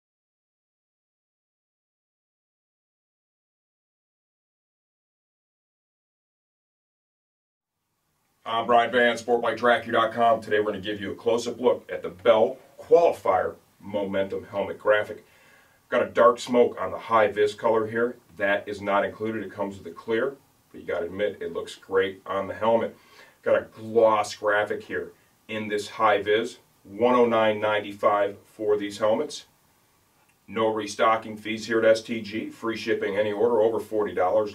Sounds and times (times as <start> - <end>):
Speech: 8.4 - 15.2, 15.9 - 29.5, 30.5 - 34.5.